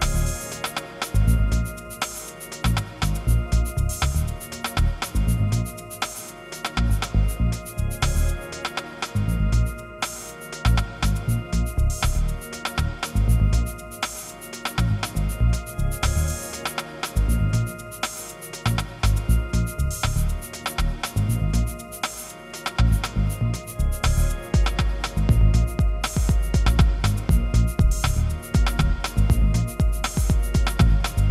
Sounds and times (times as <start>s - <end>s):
Music: 0.0s - 31.3s.